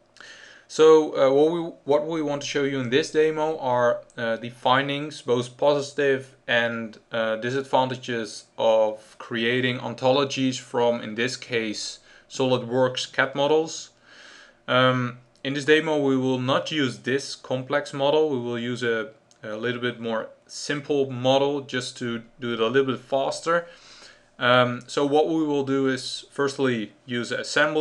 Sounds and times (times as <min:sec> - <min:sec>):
Speech: 0:00.7 - 0:14.0, 0:14.7 - 0:23.7, 0:24.4 - 0:27.8.